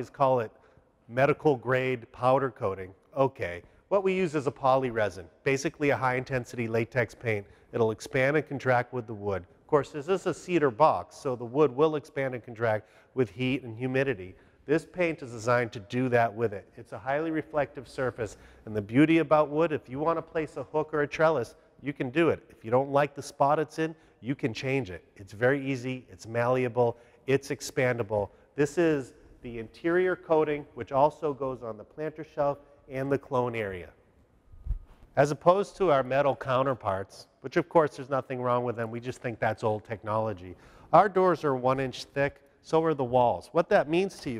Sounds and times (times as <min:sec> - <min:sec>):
Speech: 0:00.0 - 0:34.0, 0:35.2 - 0:44.4.